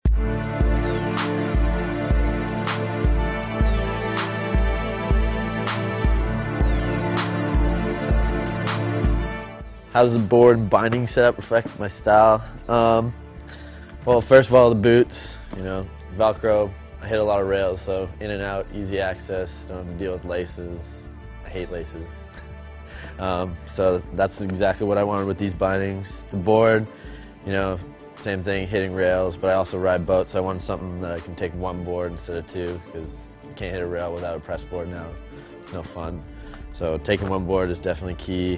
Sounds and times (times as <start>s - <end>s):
Music: 0.0s - 38.5s
Speech: 10.0s - 13.2s, 14.1s - 20.9s, 21.5s - 22.1s, 23.2s - 38.5s.